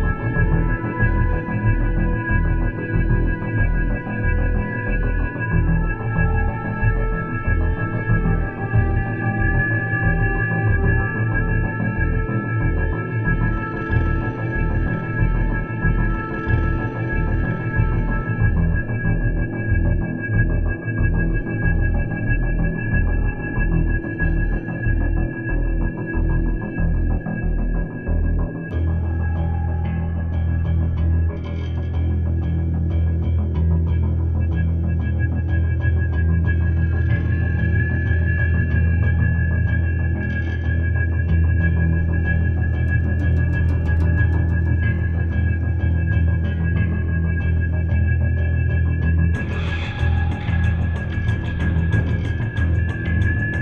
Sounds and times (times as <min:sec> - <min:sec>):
Soundtrack music: 0:00.0 - 0:33.2, 0:36.6 - 0:53.6.